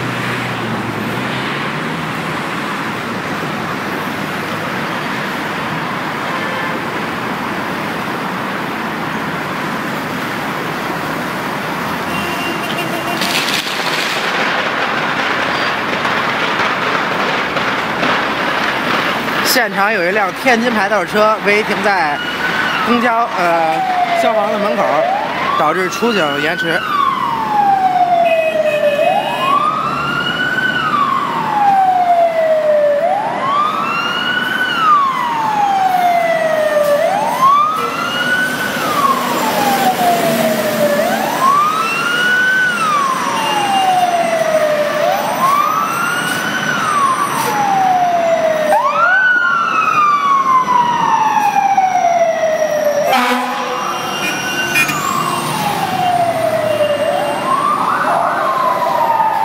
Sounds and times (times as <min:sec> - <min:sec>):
Police car (siren): 0:00.0 - 0:59.4.